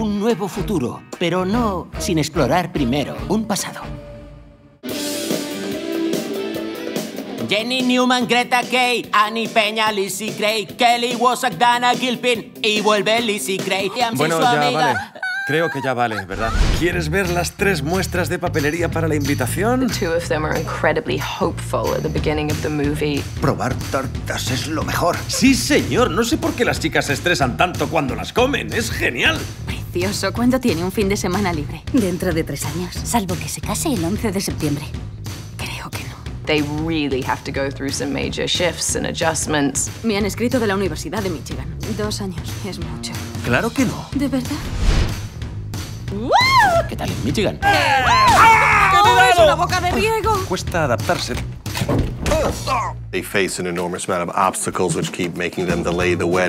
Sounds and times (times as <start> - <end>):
Music: 0.0 - 56.4.